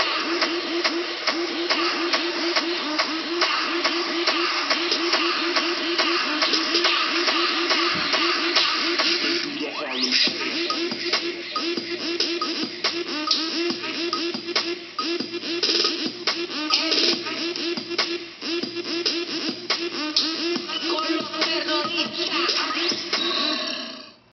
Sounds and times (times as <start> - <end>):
Music: 0.0 - 24.3.